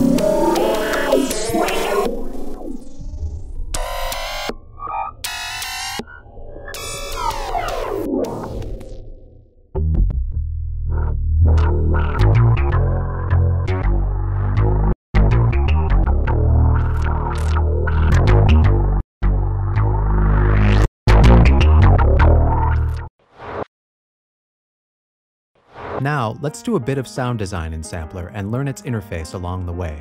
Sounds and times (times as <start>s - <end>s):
Speech: 26.0s - 30.0s.